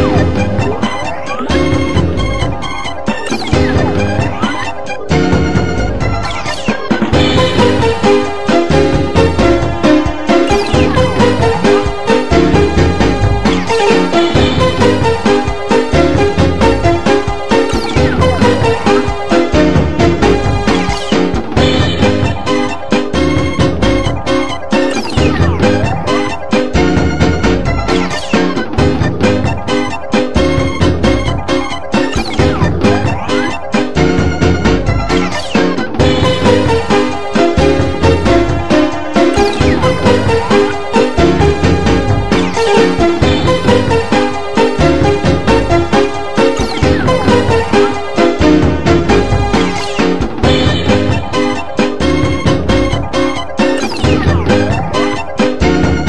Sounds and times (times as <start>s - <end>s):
Soundtrack music: 0.0s - 56.0s.